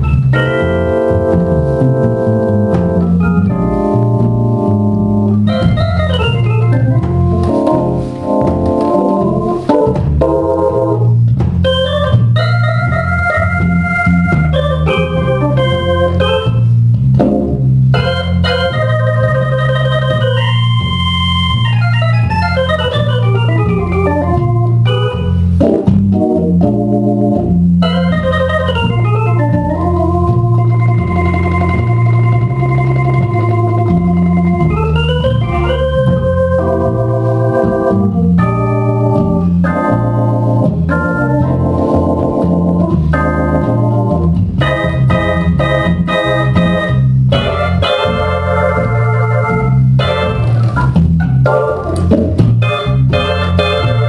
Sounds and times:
Hammond organ: 0:00.0 - 0:54.0.

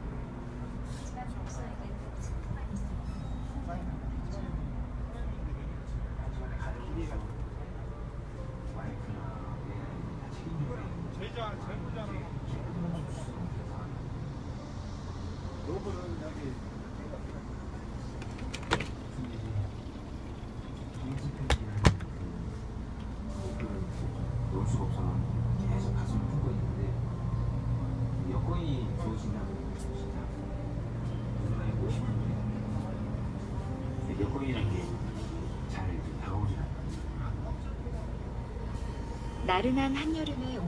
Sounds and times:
Bus: 0:00.0 - 0:40.6.

